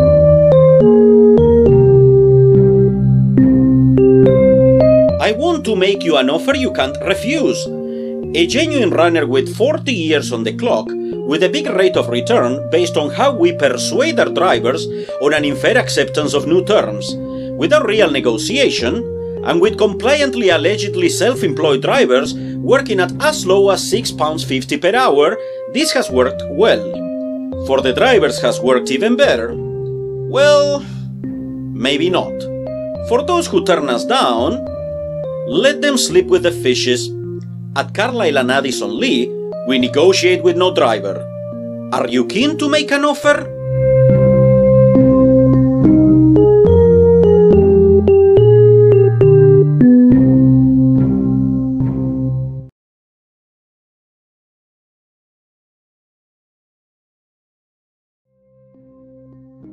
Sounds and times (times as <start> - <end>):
Music: 0.0 - 52.8, 58.3 - 59.7
Speech: 5.2 - 7.7, 8.4 - 27.0, 27.7 - 29.6, 30.3 - 30.9, 31.8 - 32.5, 33.1 - 34.6, 35.5 - 37.1, 37.8 - 41.2, 41.9 - 43.5.